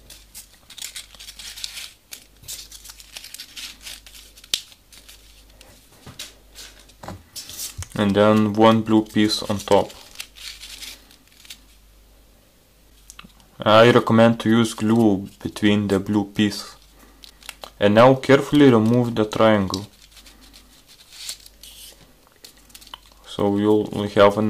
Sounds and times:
Inside, small room: 0:00.0 - 0:24.5
Speech: 0:08.0 - 0:10.0, 0:13.6 - 0:16.8, 0:17.8 - 0:19.9, 0:23.2 - 0:24.5.

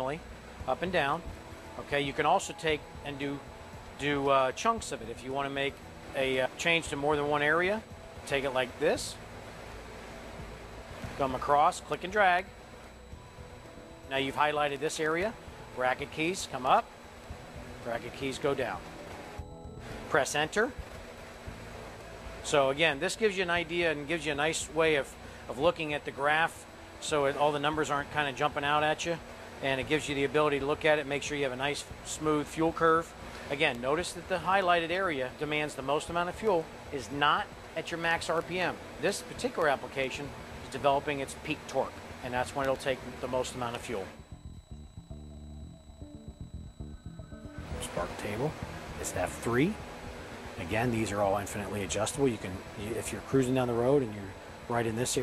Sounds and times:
Speech: 0:00.0 - 0:01.2, 0:01.8 - 0:03.4, 0:04.0 - 0:09.2, 0:11.2 - 0:12.5, 0:14.1 - 0:16.8, 0:17.8 - 0:18.8, 0:20.1 - 0:20.8, 0:22.4 - 0:44.2, 0:47.8 - 0:49.8, 0:50.6 - 0:55.2.

